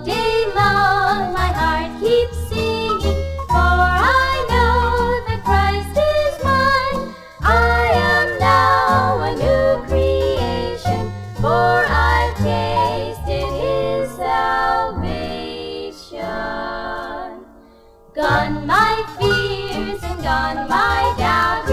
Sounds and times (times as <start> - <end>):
Choir: 0.0 - 17.6, 18.2 - 21.7.